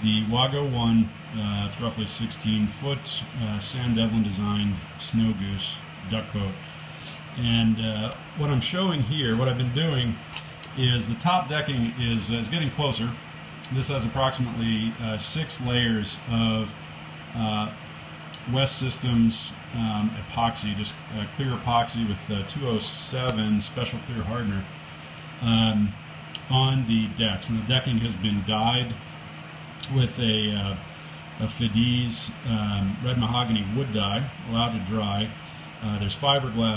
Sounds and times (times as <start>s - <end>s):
Speech: 0.0s - 6.6s, 7.4s - 17.8s, 18.4s - 24.8s, 25.4s - 29.0s, 29.8s - 36.7s.